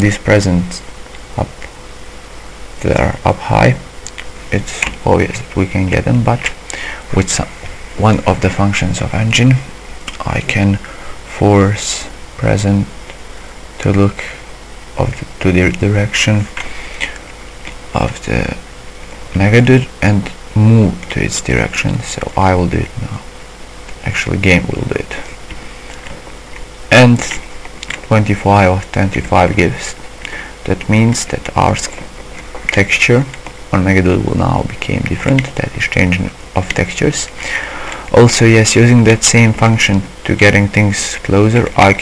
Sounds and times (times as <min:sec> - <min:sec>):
Speech: 0:00.0 - 0:01.6, 0:02.8 - 0:13.0, 0:13.8 - 0:14.4, 0:15.0 - 0:16.6, 0:17.9 - 0:18.6, 0:19.3 - 0:23.3, 0:24.0 - 0:25.4, 0:26.9 - 0:30.0, 0:30.6 - 0:32.1, 0:32.7 - 0:37.4, 0:38.1 - 0:42.0.